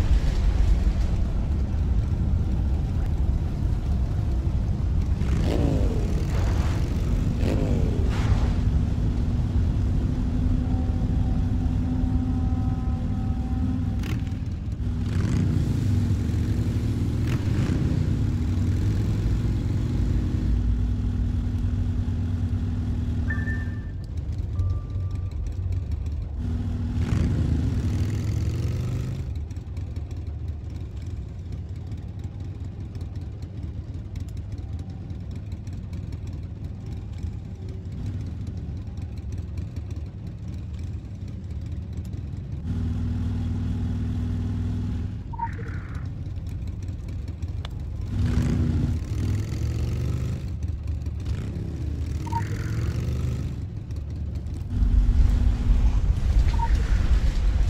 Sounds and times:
Motor vehicle (road): 0.0s - 57.6s.

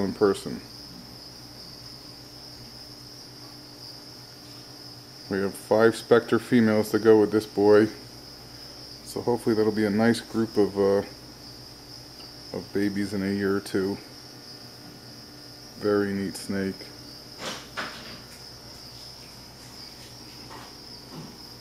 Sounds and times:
Speech: 0.0s - 0.7s, 5.3s - 8.0s, 9.1s - 11.2s, 12.5s - 14.1s, 15.8s - 17.0s
Snake: 0.0s - 21.6s.

